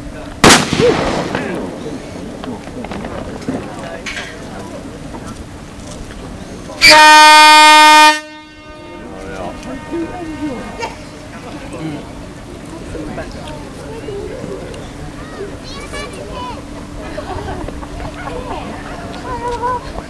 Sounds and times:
Boat, Water vehicle: 0:00.0 - 0:20.0
Air horn, truck horn: 0:06.8 - 0:11.2.

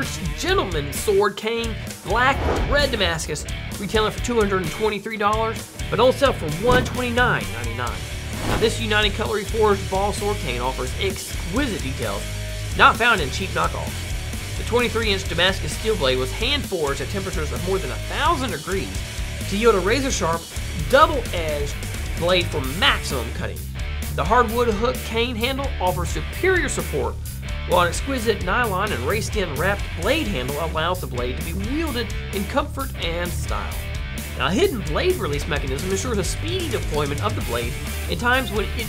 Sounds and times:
Speech: 0:00.0 - 0:14.0, 0:14.6 - 0:38.8
Music: 0:00.0 - 0:38.8.

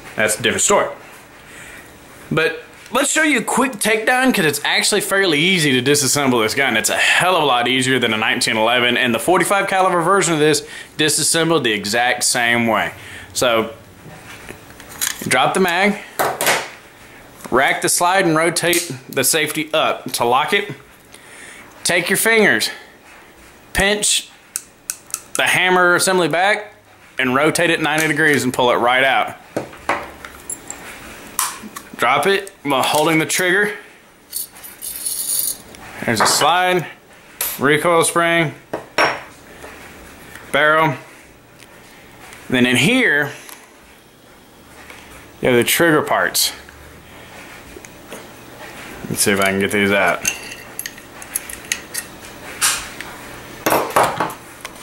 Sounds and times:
Speech: 0:00.2 - 0:01.0, 0:02.3 - 0:13.8, 0:15.2 - 0:16.1, 0:17.5 - 0:20.8, 0:21.8 - 0:22.9, 0:23.7 - 0:24.3, 0:25.4 - 0:29.4, 0:32.0 - 0:33.9, 0:36.0 - 0:38.6, 0:40.5 - 0:41.1, 0:42.5 - 0:43.4, 0:45.4 - 0:46.7, 0:49.0 - 0:50.3.

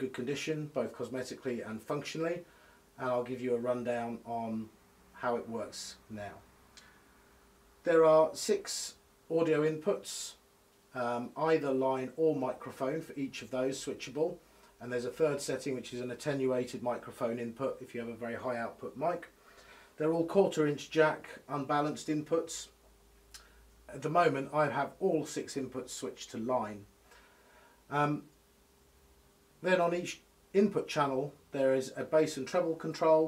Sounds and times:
Speech: 0:00.0 - 0:06.4, 0:07.9 - 0:10.4, 0:11.0 - 0:19.3, 0:20.0 - 0:22.8, 0:23.9 - 0:26.9, 0:27.9 - 0:28.3, 0:29.6 - 0:33.2.

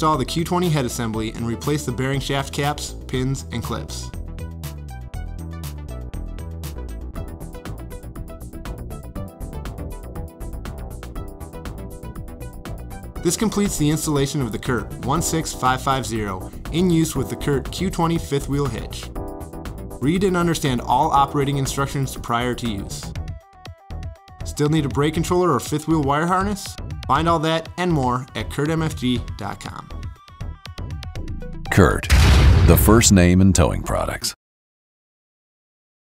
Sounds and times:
Music: 0:00.0 - 0:34.4
Speech synthesizer: 0:32.7 - 0:34.4.

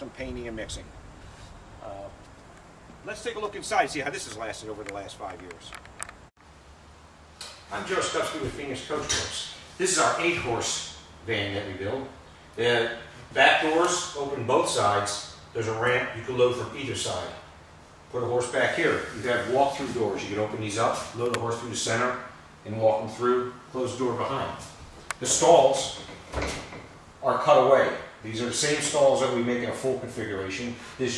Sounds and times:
Speech: 0:00.0 - 0:00.9, 0:01.8 - 0:02.2, 0:03.0 - 0:05.8, 0:07.7 - 0:17.4, 0:18.1 - 0:26.0, 0:27.2 - 0:31.1.

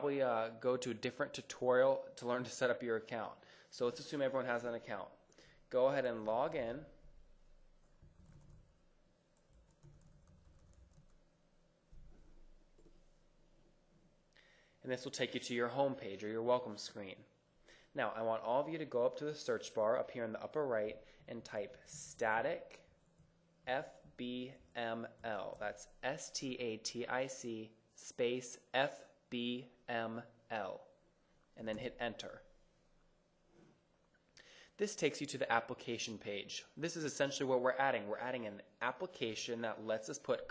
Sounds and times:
Speech: 0:00.0 - 0:07.0, 0:14.8 - 0:17.3, 0:17.9 - 0:22.9, 0:23.7 - 0:31.0, 0:31.6 - 0:32.5, 0:34.8 - 0:40.5.

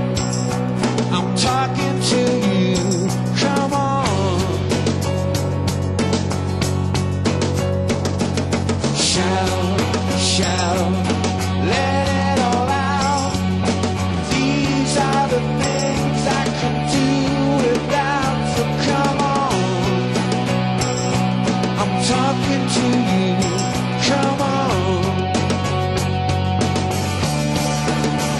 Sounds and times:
Music: 0:00.0 - 0:28.3.

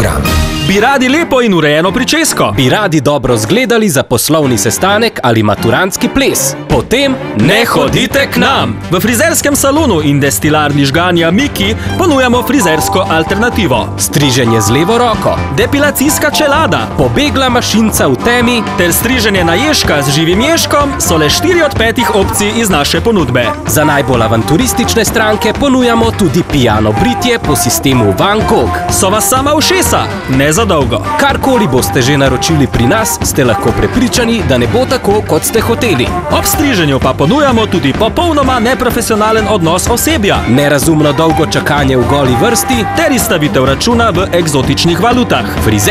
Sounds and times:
Music: 0:00.0 - 0:45.9
Speech: 0:00.0 - 0:45.9.

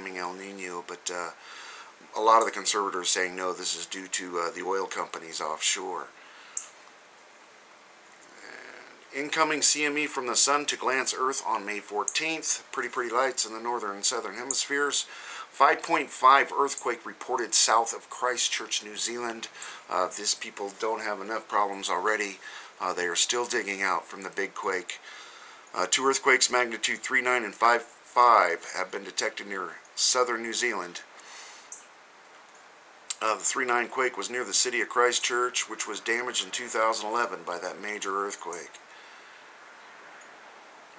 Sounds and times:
Speech: 0:00.0 - 0:01.4, 0:02.1 - 0:06.1, 0:08.4 - 0:25.0, 0:25.8 - 0:31.1, 0:33.1 - 0:38.8.

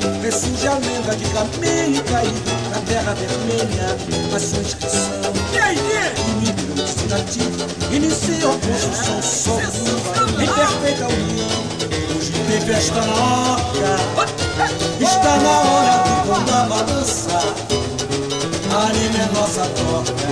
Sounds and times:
Music of Africa: 0:00.0 - 0:20.3.

